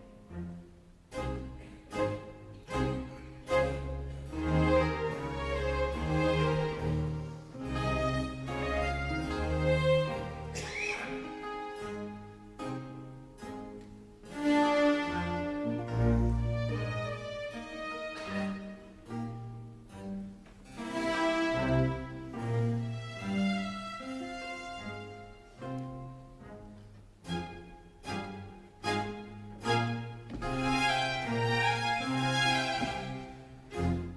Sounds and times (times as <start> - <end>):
Music: 0.0 - 34.1.